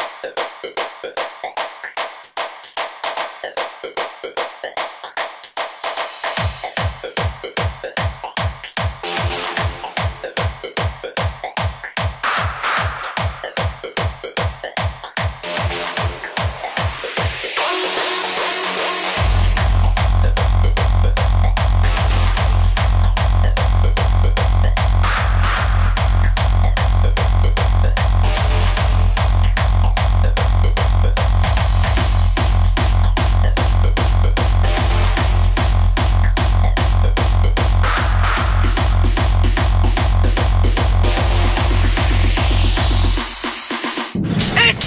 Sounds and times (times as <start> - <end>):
Music: 0.0 - 44.8.